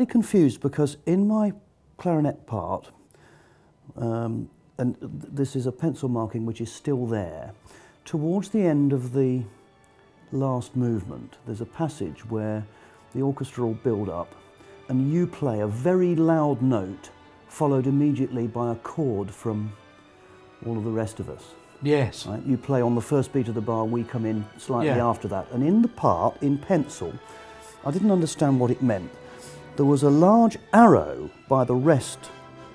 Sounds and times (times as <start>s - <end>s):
Speech: 0.0s - 3.0s, 3.9s - 9.5s, 10.3s - 14.3s, 14.9s - 19.8s, 20.6s - 27.2s, 27.8s - 29.1s, 29.8s - 32.3s
Music: 0.0s - 32.7s.